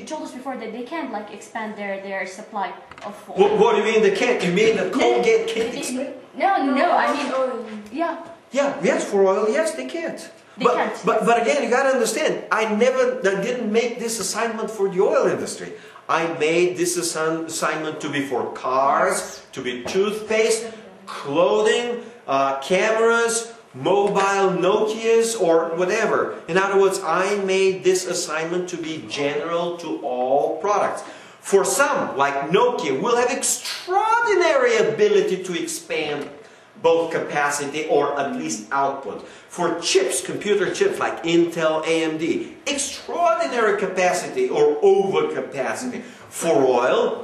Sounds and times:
Inside, small room: 0:00.0 - 0:47.2
Speech: 0:03.1 - 0:47.2.

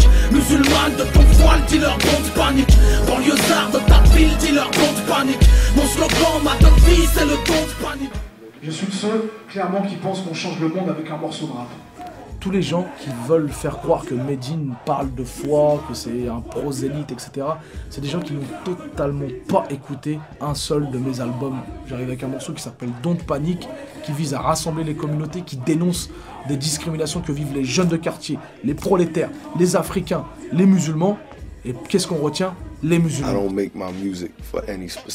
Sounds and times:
Music: 0:00.0 - 0:35.1
Speech: 0:08.4 - 0:35.1.

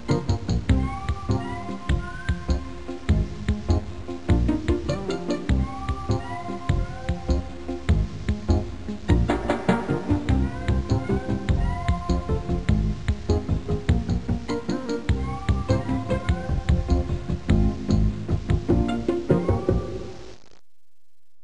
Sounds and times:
Music: 0:00.0 - 0:20.4.

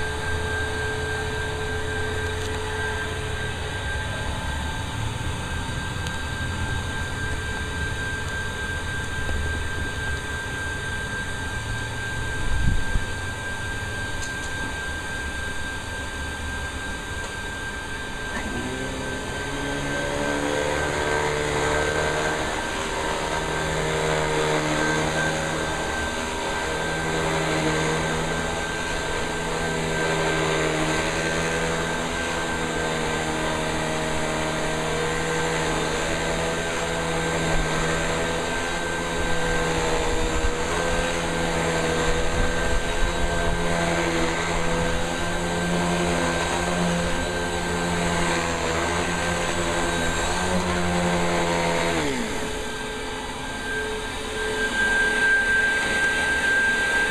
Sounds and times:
Vacuum cleaner: 0:00.0 - 0:57.1.

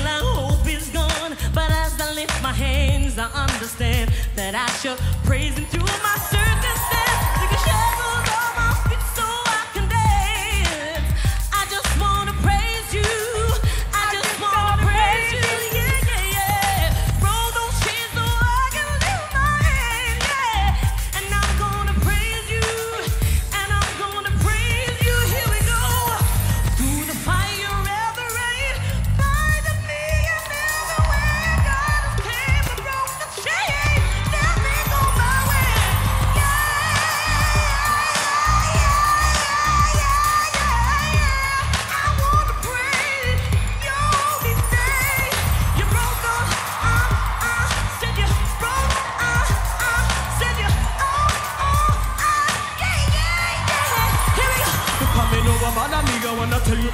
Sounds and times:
Music: 0:00.0 - 0:56.9.

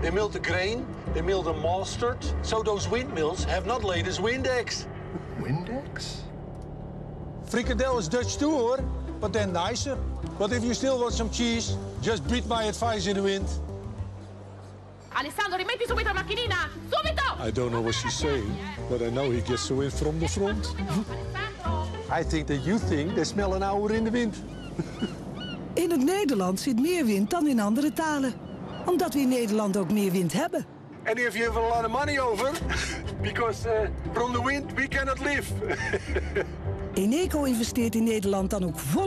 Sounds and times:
Music: 0:00.0 - 0:28.2, 0:28.9 - 0:39.0.

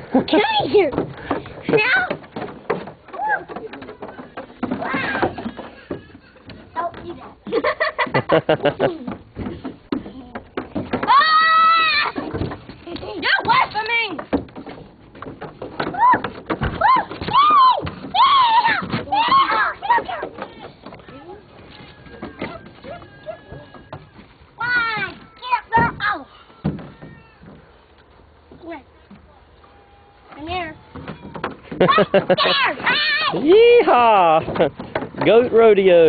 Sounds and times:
Child speech, kid speaking: 0:01.7 - 0:02.2, 0:04.8 - 0:05.4, 0:06.8 - 0:07.4, 0:13.0 - 0:14.2, 0:17.4 - 0:21.4, 0:24.6 - 0:26.5, 0:28.6 - 0:28.9, 0:30.3 - 0:30.8, 0:31.9 - 0:33.5.

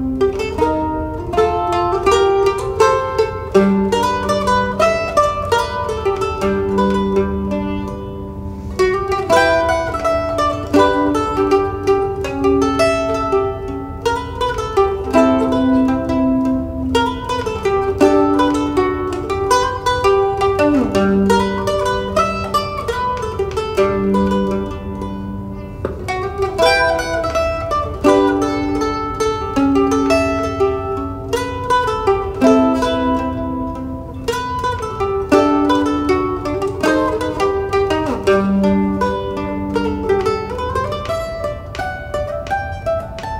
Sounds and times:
Mandolin: 0:00.0 - 0:43.3.

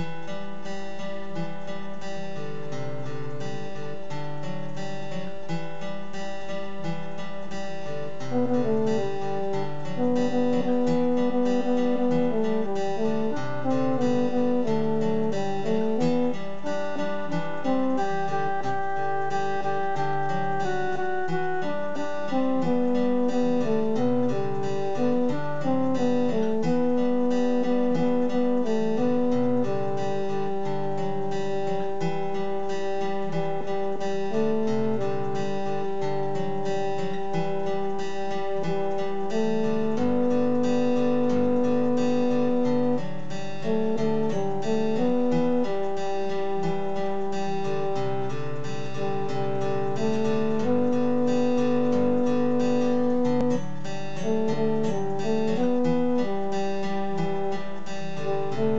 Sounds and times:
Acoustic guitar: 0:00.0 - 0:58.7.

